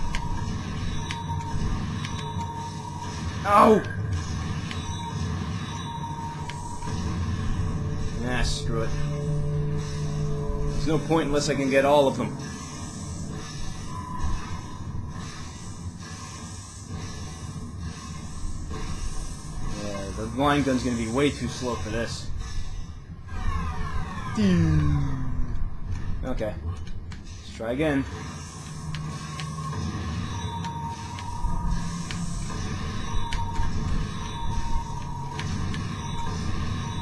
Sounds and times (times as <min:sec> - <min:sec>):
Music: 0:00.0 - 0:37.0.